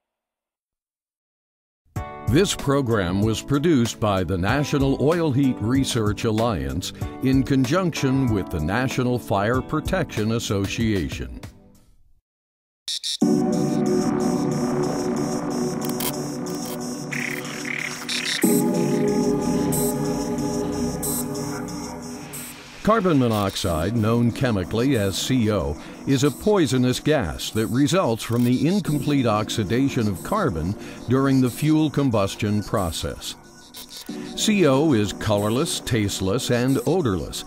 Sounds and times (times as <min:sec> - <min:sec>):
Music: 0:02.0 - 0:12.1, 0:13.2 - 0:37.4
Speech: 0:02.3 - 0:11.4, 0:22.8 - 0:33.4, 0:34.4 - 0:37.4.